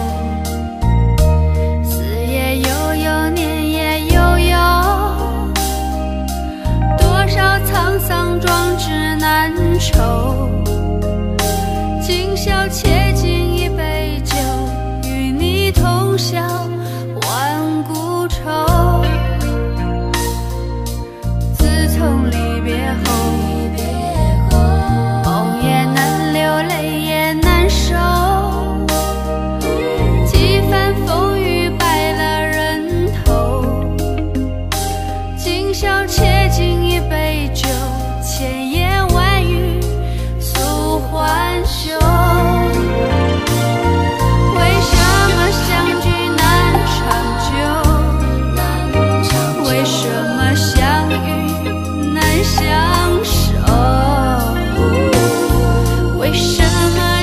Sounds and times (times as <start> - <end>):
Music: 0.0 - 57.2.